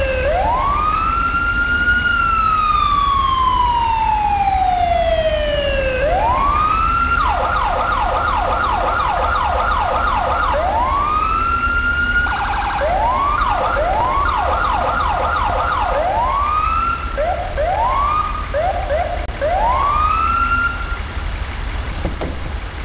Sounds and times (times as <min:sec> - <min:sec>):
Fire engine, fire truck (siren): 0:00.0 - 0:21.7.